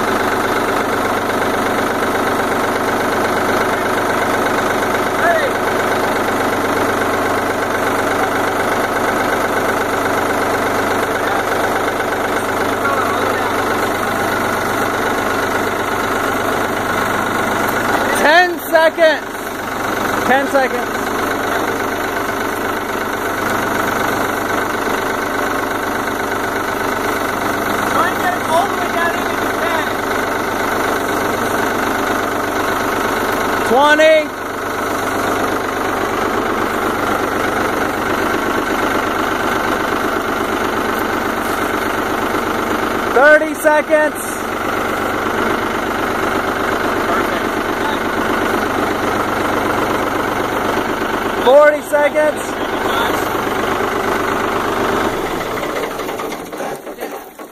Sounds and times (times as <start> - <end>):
Speech: 5.2 - 5.6, 17.9 - 19.3, 20.3 - 20.9, 27.9 - 30.0, 33.6 - 34.4, 43.2 - 44.4, 47.0 - 48.2, 51.4 - 53.3.